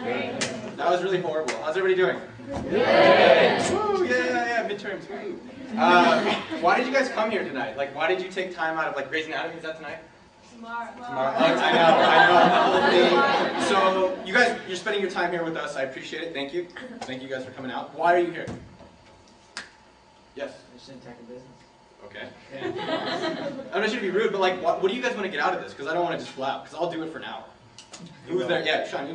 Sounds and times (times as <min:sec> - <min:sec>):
Conversation: 0:00.0 - 0:29.1
Male speech, man speaking: 0:00.8 - 0:02.3, 0:03.7 - 0:10.1, 0:11.1 - 0:18.6, 0:20.4 - 0:22.8, 0:23.7 - 0:27.5, 0:28.2 - 0:29.1
Narration, monologue: 0:04.2 - 0:10.6, 0:11.4 - 0:29.1.